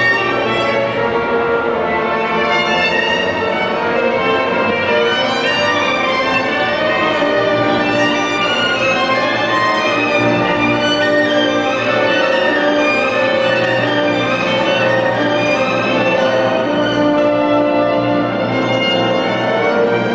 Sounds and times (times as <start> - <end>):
Violin, fiddle: 0.0 - 20.1.